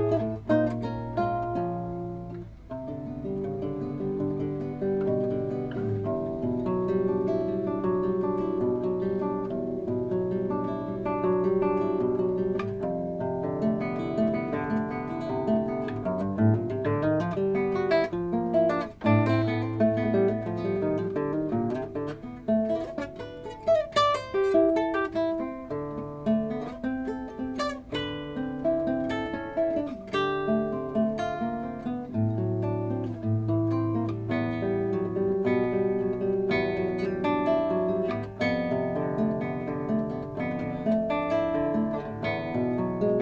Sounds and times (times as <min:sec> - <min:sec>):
Guitar: 0:00.0 - 0:43.2
Mandolin: 0:00.0 - 0:43.2.